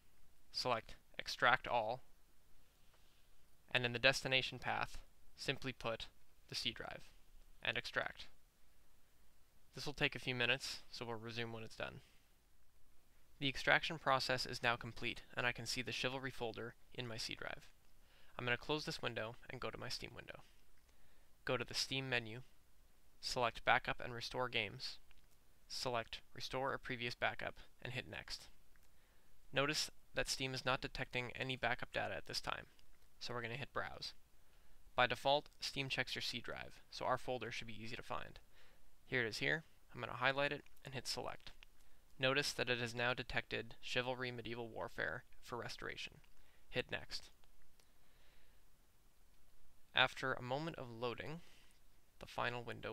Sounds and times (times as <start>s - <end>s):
Speech: 0.5s - 2.1s, 3.7s - 8.4s, 9.7s - 12.1s, 13.4s - 17.8s, 18.4s - 20.5s, 21.4s - 22.5s, 23.2s - 25.1s, 25.7s - 28.6s, 29.5s - 34.2s, 35.0s - 38.4s, 39.1s - 41.6s, 42.2s - 47.4s, 49.9s - 51.4s, 52.2s - 52.9s.